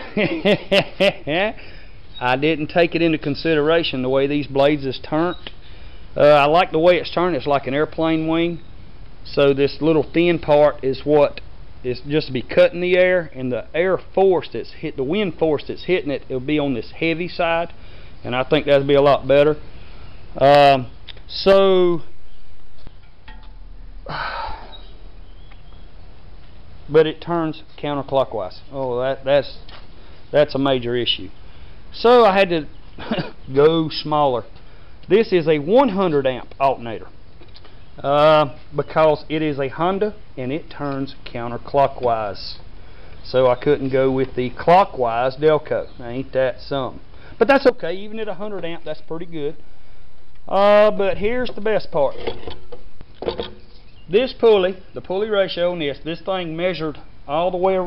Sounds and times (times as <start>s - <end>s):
Speech: 1.2s - 1.6s, 2.2s - 5.5s, 6.2s - 8.6s, 9.3s - 19.6s, 20.4s - 22.1s, 26.9s - 29.6s, 30.3s - 34.5s, 35.1s - 37.1s, 38.0s - 49.6s, 50.5s - 52.4s, 54.1s - 57.8s.